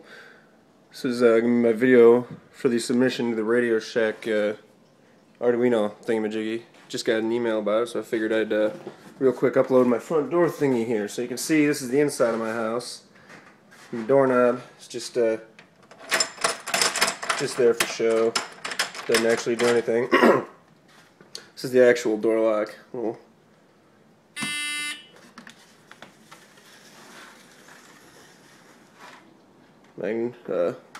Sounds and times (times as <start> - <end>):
Speech: 0.9 - 4.7, 5.4 - 13.1, 13.9 - 15.5, 17.4 - 18.4, 19.1 - 20.5, 21.6 - 23.3, 30.0 - 30.9.